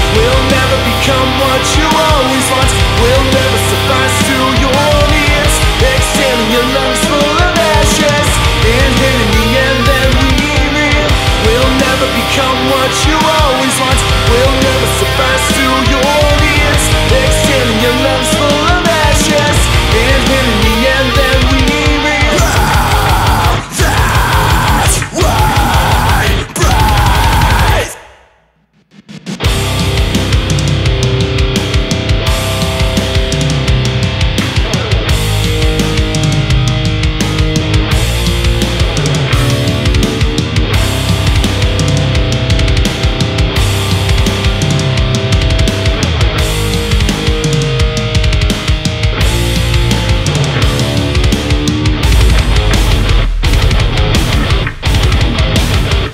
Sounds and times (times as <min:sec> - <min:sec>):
Heavy metal: 0:00.0 - 0:56.1.